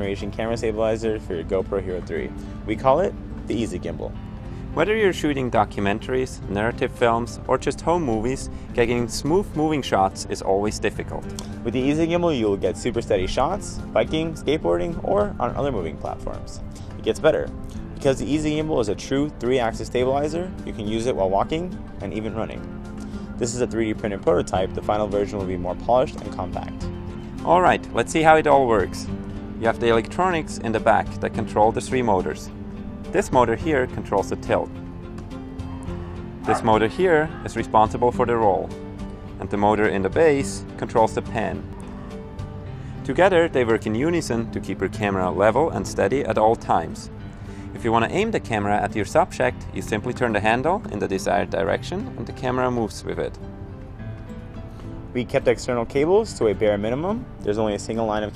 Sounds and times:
Speech: 0.0s - 4.1s, 4.8s - 22.6s, 23.4s - 26.8s, 27.4s - 32.5s, 33.2s - 34.7s, 36.5s - 38.7s, 39.4s - 41.6s, 43.1s - 47.1s, 47.8s - 53.4s, 55.2s - 58.3s
Music: 0.0s - 58.3s.

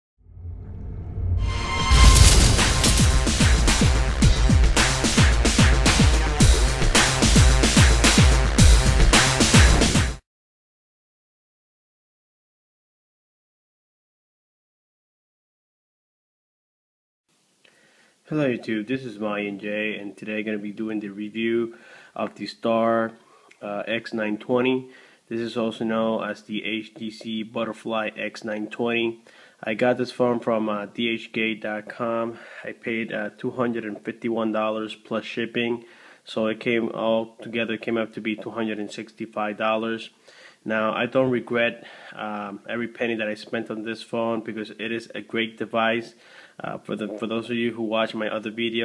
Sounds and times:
Trance music: 1.3s - 10.2s.

